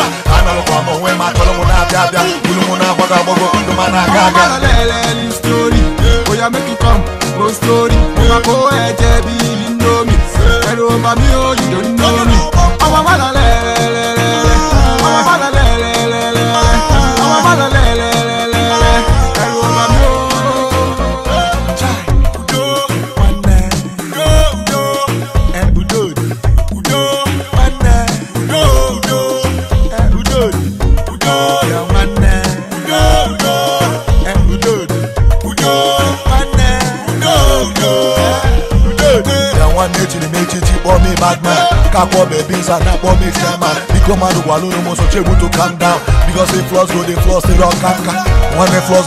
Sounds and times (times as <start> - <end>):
Music of Africa: 0.0 - 49.0.